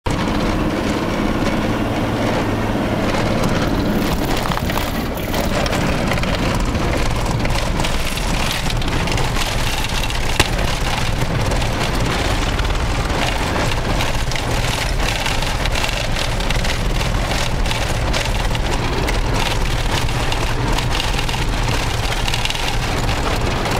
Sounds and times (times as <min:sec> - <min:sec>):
Truck: 0:00.0 - 0:23.7.